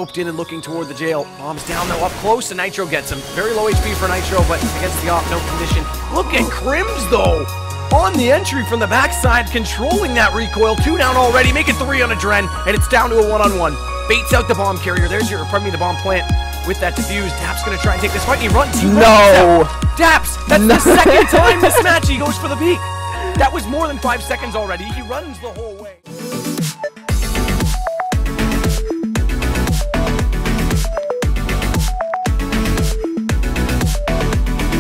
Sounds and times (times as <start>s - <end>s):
Speech: 0.0s - 26.0s
Music: 0.0s - 34.8s.